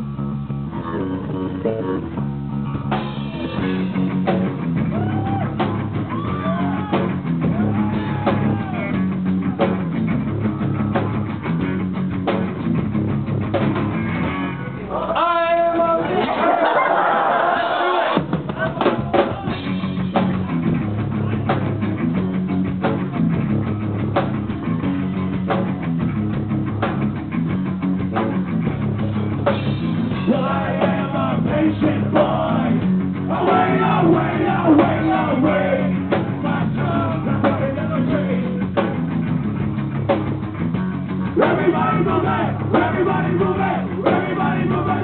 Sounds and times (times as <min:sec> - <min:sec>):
Music: 0:00.0 - 0:16.2, 0:17.9 - 0:45.0
Speech: 0:14.8 - 0:16.6.